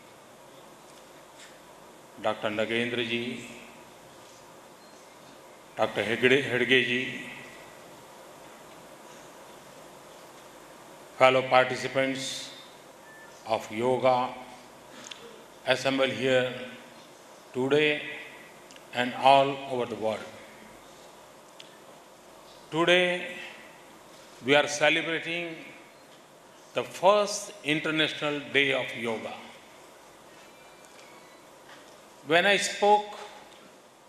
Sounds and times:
Narration, monologue: 0.0 - 34.0
Male speech, man speaking: 2.2 - 3.6, 5.8 - 7.4, 11.2 - 12.6, 13.5 - 14.6, 15.7 - 16.8, 17.6 - 18.3, 19.0 - 20.4, 22.8 - 23.5, 24.4 - 25.8, 26.8 - 29.5, 32.3 - 33.4.

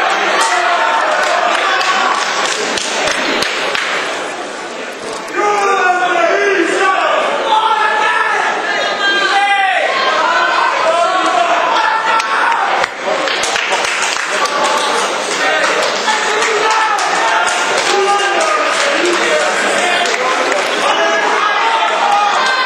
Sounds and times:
Speech: 4.9 - 13.4, 14.3 - 22.6.

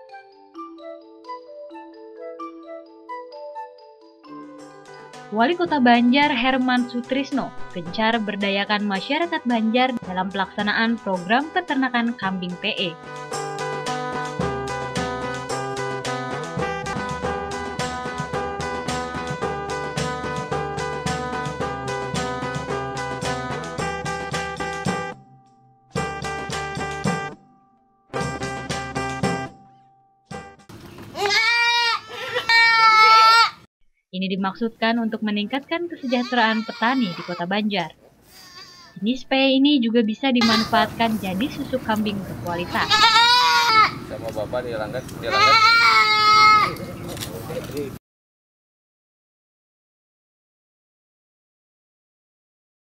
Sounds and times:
Music: 0.0 - 30.7
Goat: 31.2 - 33.6, 36.0 - 37.4, 40.4 - 40.8, 42.7 - 44.0, 45.3 - 46.8.

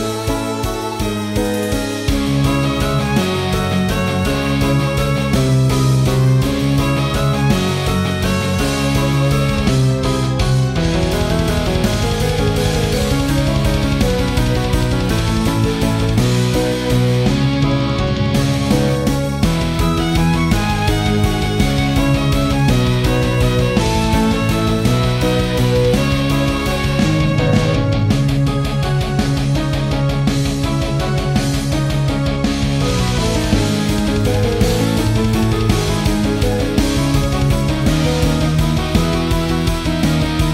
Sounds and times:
Violin, fiddle: 0.0 - 18.1, 18.7 - 28.6.

